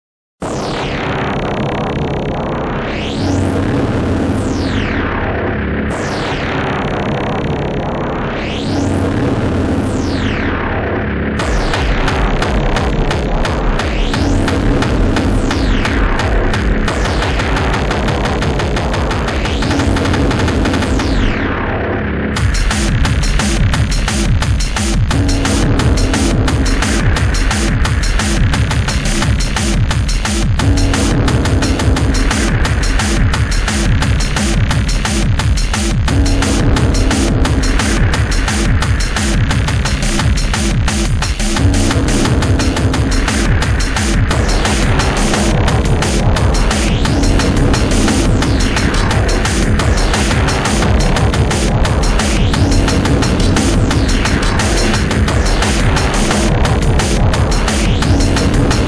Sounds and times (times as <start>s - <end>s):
Electronica: 0.4s - 58.8s.